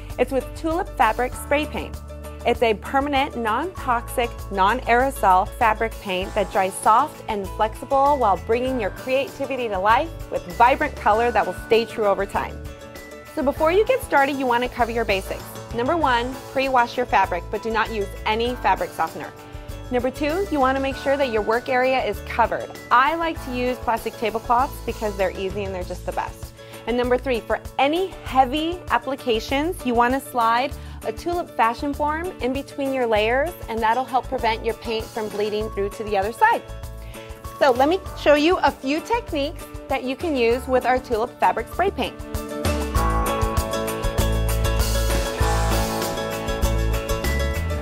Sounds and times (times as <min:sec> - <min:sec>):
Music: 0:00.0 - 0:47.8
Speech: 0:00.2 - 0:01.9, 0:02.5 - 0:12.5, 0:13.4 - 0:19.3, 0:19.9 - 0:36.6, 0:37.6 - 0:42.2.